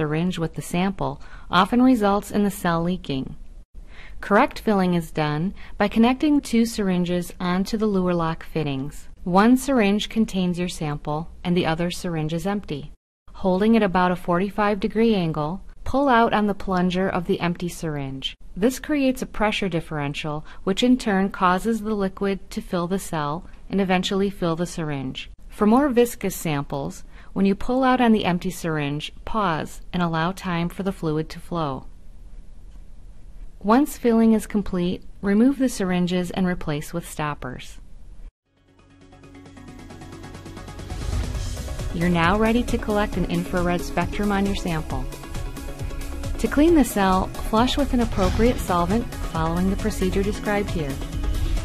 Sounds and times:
Speech: 0.0s - 3.4s, 4.2s - 31.9s, 33.6s - 37.8s, 42.0s - 45.2s, 46.4s - 51.0s.

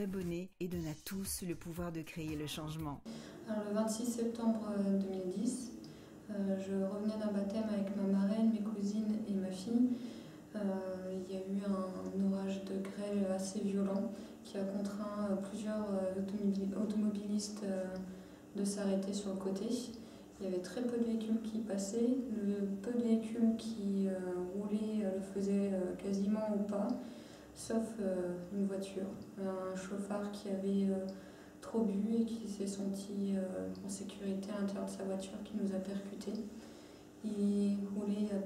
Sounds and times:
Speech: 0.0s - 27.0s, 27.6s - 36.5s, 37.2s - 38.4s.

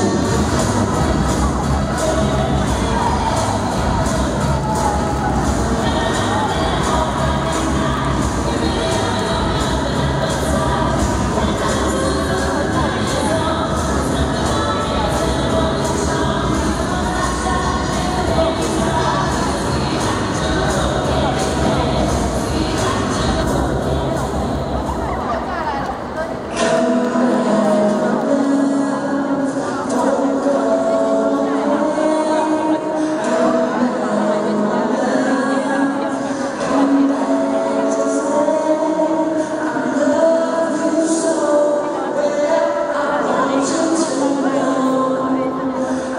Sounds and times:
Music: 0.0s - 46.1s
Speech: 0.0s - 46.1s.

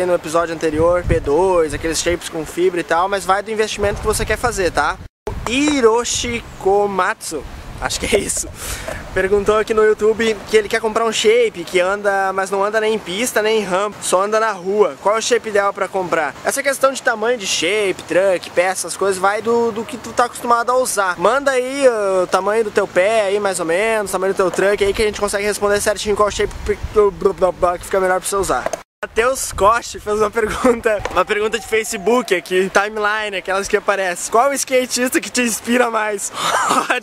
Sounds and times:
Speech: 0.0s - 8.6s, 9.2s - 37.0s.

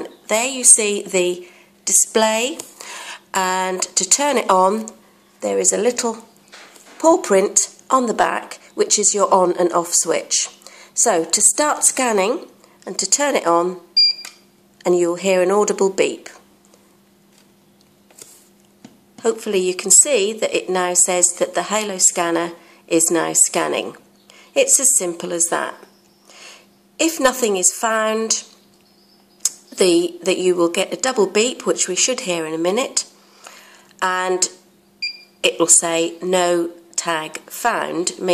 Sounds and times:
Speech: 0.0s - 2.6s, 3.3s - 6.3s, 7.0s - 13.8s, 14.8s - 16.5s, 19.2s - 24.0s, 24.6s - 25.9s, 27.0s - 28.6s, 29.5s - 33.1s, 34.0s - 34.6s, 35.5s - 38.3s.

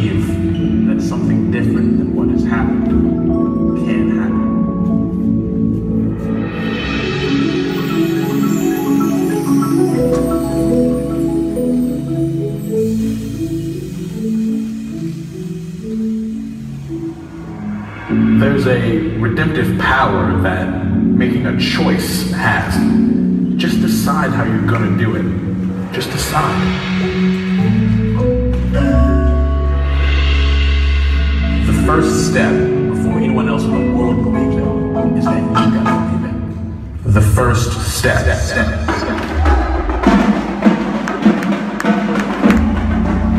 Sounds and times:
Speech: 0.0s - 2.9s, 3.8s - 4.5s, 18.3s - 23.0s, 23.6s - 26.8s, 31.6s - 36.4s, 37.0s - 39.7s
Percussion: 0.0s - 43.3s.

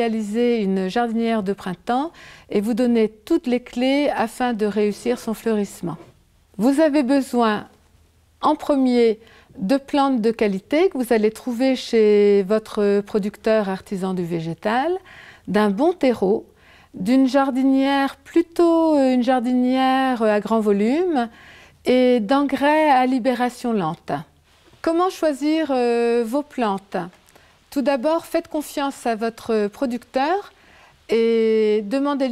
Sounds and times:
Speech: 0.0s - 7.8s, 8.4s - 21.3s, 21.9s - 30.5s, 31.1s - 32.3s.

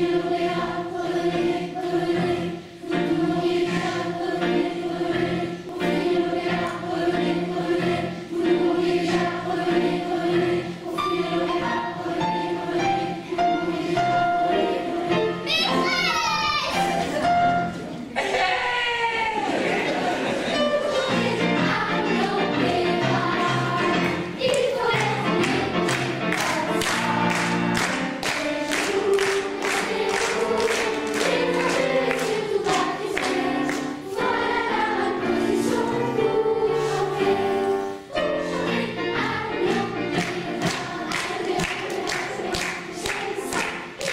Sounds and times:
Music: 0.0s - 18.2s, 20.4s - 44.1s.

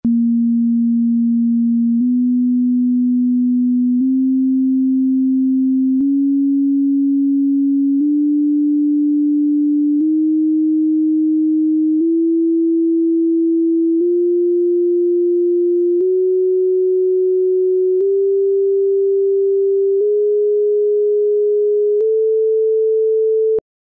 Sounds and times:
Chirp tone: 0.1s - 23.6s.

